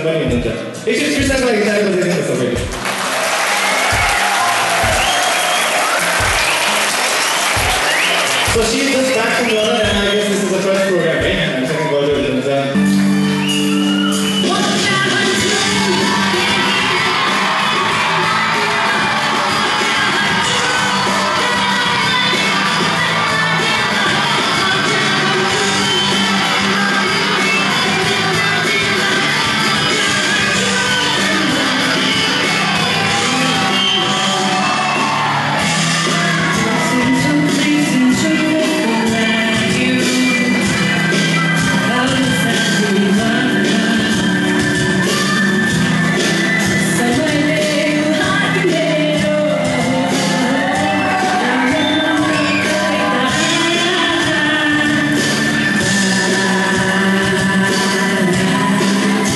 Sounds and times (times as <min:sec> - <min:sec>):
Speech: 0:00.0 - 0:02.7, 0:08.5 - 0:12.8
Music: 0:00.0 - 0:59.3.